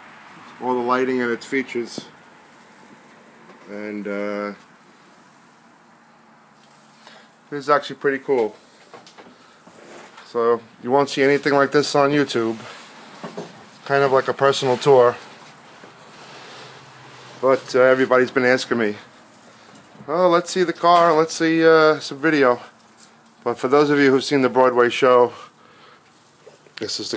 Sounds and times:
Speech: 0.6s - 2.1s, 3.7s - 4.6s, 7.5s - 8.6s, 10.2s - 12.8s, 13.8s - 15.2s, 17.4s - 19.1s, 20.1s - 22.7s, 23.4s - 25.5s, 26.8s - 27.1s.

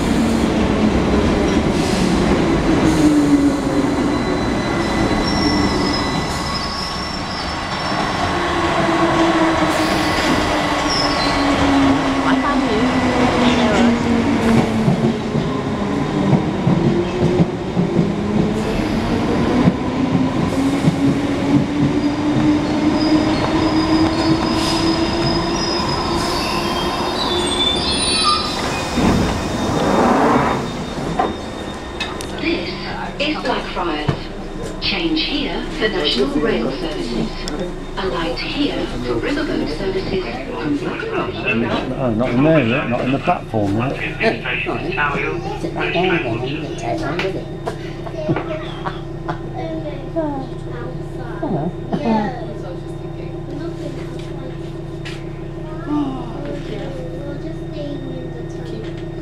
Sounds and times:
Subway, metro, underground: 0.0s - 59.2s
Train: 0.0s - 59.2s.

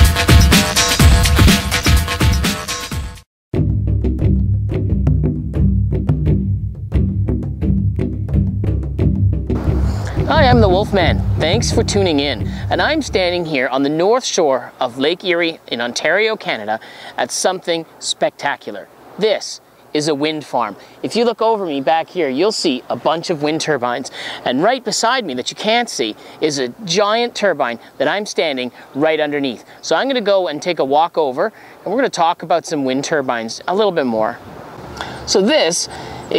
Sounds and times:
Speech: 10.2s - 34.4s, 35.3s - 36.3s.

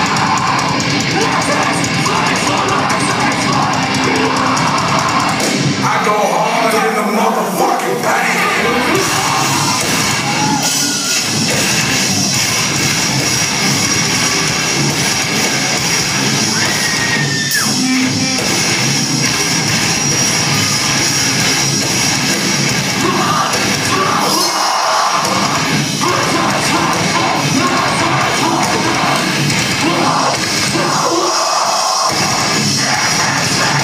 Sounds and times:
Music: 0.0s - 33.8s.

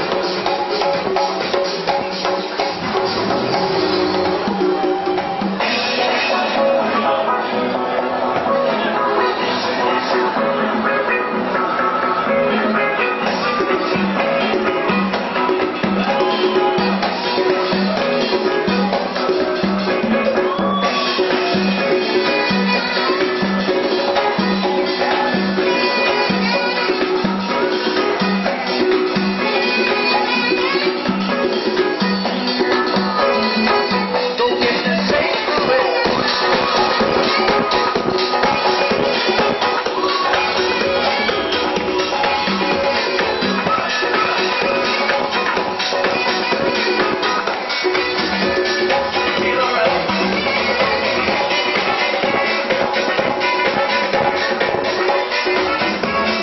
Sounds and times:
Percussion: 0.0s - 56.4s.

